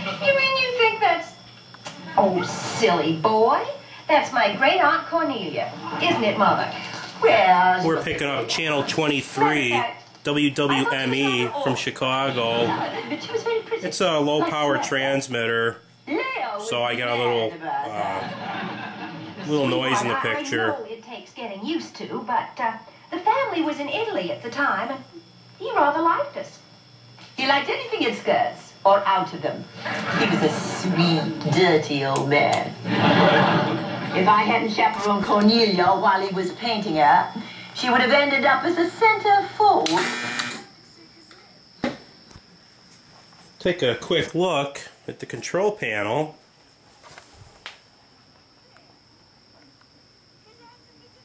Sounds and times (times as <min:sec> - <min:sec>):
Inside, small room: 0:00.0 - 0:51.2
Television: 0:00.0 - 0:51.2.